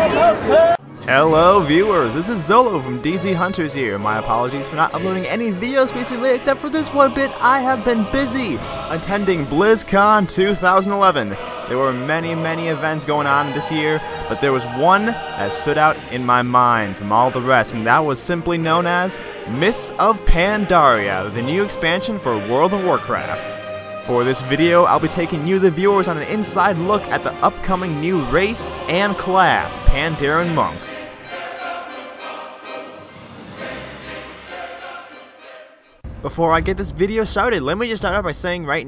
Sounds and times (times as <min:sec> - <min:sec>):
Speech: 0:00.0 - 0:23.4, 0:24.1 - 0:31.0, 0:36.2 - 0:38.8
Music: 0:00.0 - 0:38.8.